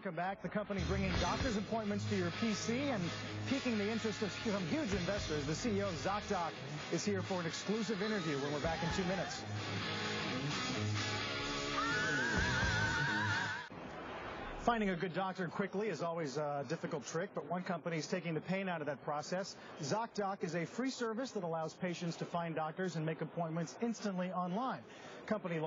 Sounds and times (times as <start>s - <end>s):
Speech: 0.0s - 9.4s, 14.6s - 25.6s
Music: 0.8s - 13.7s.